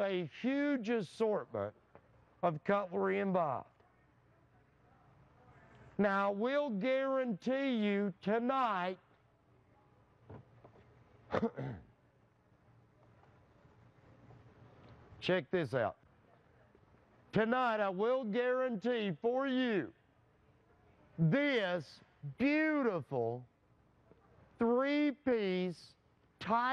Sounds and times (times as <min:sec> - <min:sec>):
Speech: 0:00.0 - 0:01.8, 0:02.4 - 0:09.0, 0:15.2 - 0:16.7, 0:17.3 - 0:20.0, 0:20.8 - 0:23.5, 0:24.1 - 0:26.7.